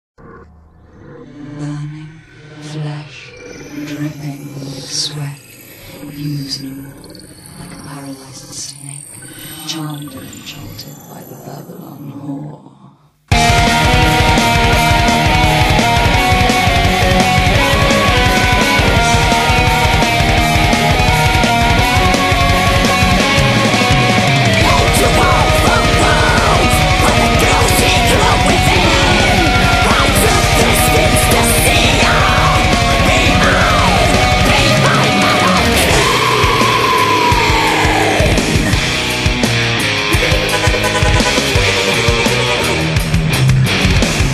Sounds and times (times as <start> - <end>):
Speech: 1.3 - 5.4, 6.0 - 13.0, 24.6 - 38.4.